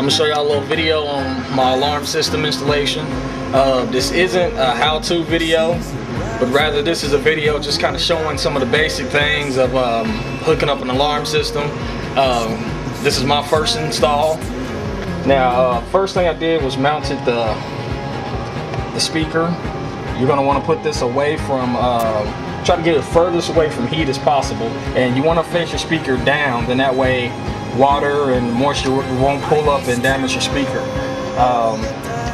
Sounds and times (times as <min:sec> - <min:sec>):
Speech: 0:00.0 - 0:17.6, 0:19.0 - 0:19.6, 0:20.2 - 0:32.3
Music: 0:00.0 - 0:32.3.